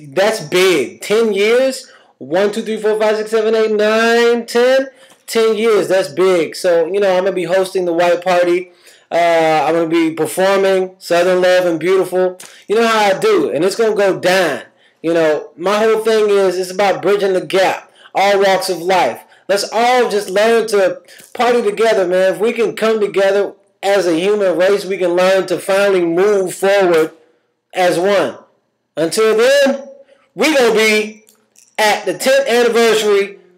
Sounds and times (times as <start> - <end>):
Speech: 0.0 - 27.1, 27.8 - 31.2, 31.8 - 33.4.